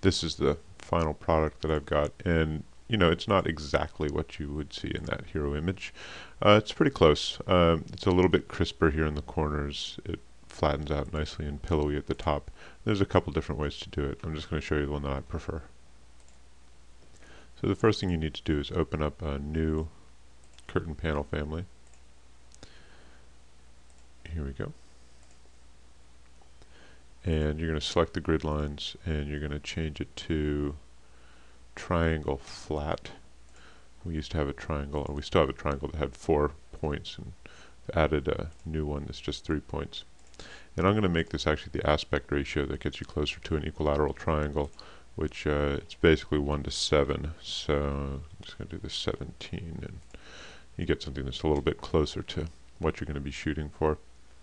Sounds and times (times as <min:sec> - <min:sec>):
Speech: 0:00.0 - 0:15.8, 0:17.6 - 0:20.0, 0:20.6 - 0:21.8, 0:24.2 - 0:24.8, 0:27.2 - 0:30.9, 0:31.8 - 0:33.3, 0:34.0 - 0:40.1, 0:40.8 - 0:50.1, 0:50.8 - 0:54.1.